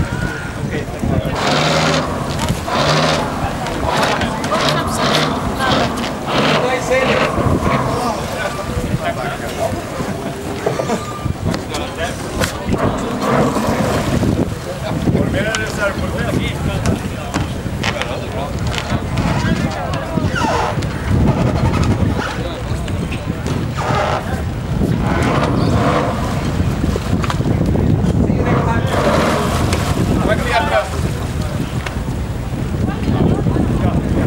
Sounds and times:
Speech: 0.0 - 26.4, 27.4 - 32.0, 32.6 - 34.2
Boat, Water vehicle: 0.0 - 34.2.

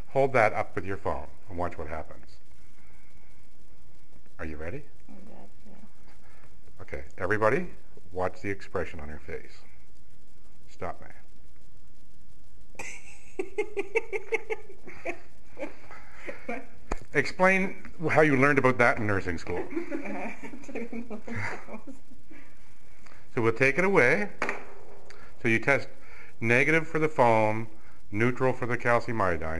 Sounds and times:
Speech: 25.4 - 29.5.

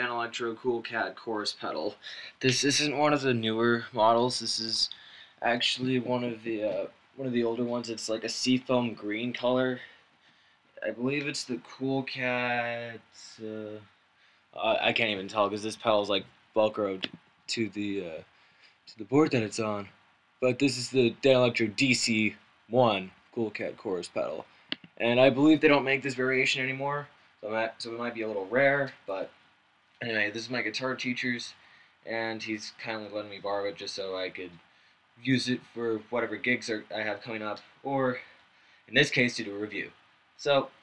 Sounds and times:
Speech: 0.0 - 10.0, 10.8 - 13.8, 14.6 - 18.2, 18.9 - 29.3, 30.0 - 34.6, 35.2 - 38.3, 38.9 - 40.8.

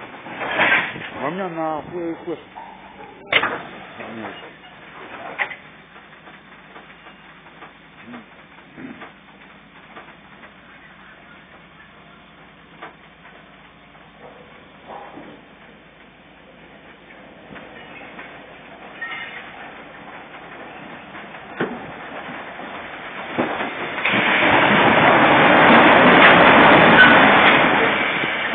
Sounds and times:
Railroad car, train wagon: 0.0 - 28.5
Train: 0.0 - 28.5
Speech: 1.2 - 2.5, 3.2 - 4.4, 10.7 - 12.3.

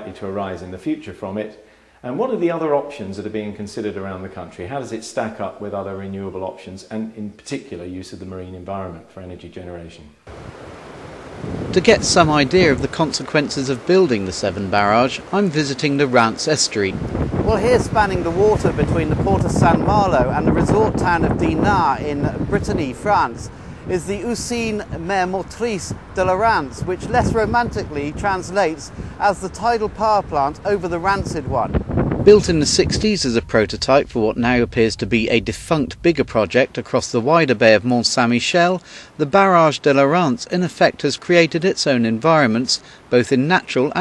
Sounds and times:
Speech: 0.0 - 10.2, 11.8 - 31.7, 32.3 - 44.0
Outside, rural or natural: 10.1 - 44.0.

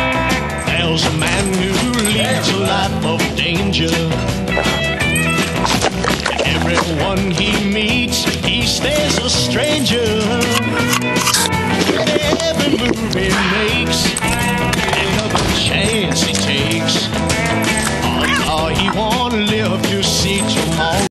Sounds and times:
Music: 0.0 - 21.1.

